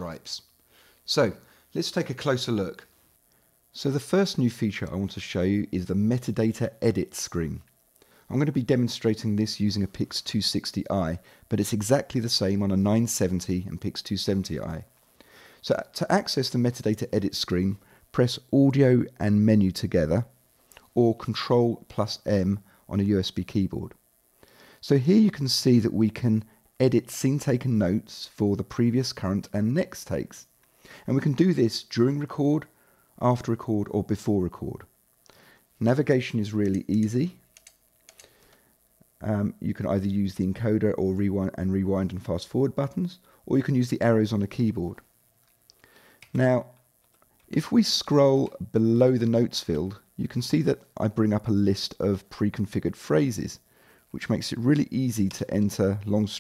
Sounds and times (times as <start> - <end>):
Speech: 0.0 - 0.5, 1.1 - 2.9, 3.7 - 7.7, 8.3 - 14.9, 15.6 - 24.0, 24.8 - 34.9, 35.8 - 37.4, 39.2 - 45.1, 46.3 - 46.8, 47.5 - 56.4.